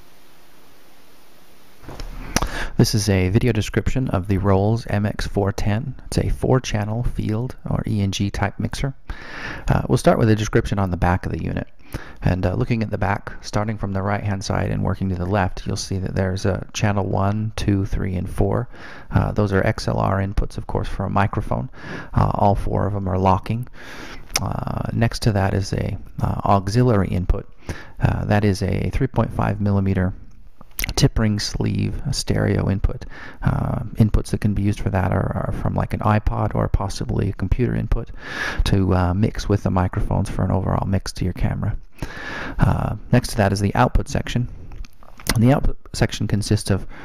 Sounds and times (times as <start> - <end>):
Speech: 2.4 - 23.8, 24.4 - 41.8, 42.6 - 44.6, 45.2 - 46.9.